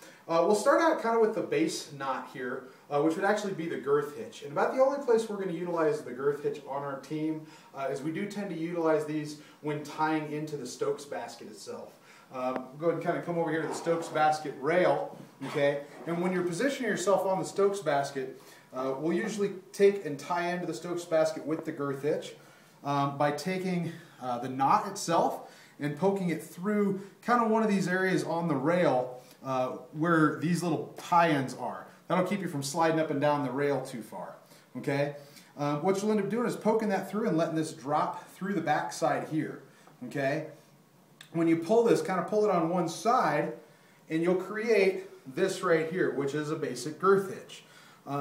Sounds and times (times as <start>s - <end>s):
Speech: 0.3s - 40.6s, 41.2s - 48.2s.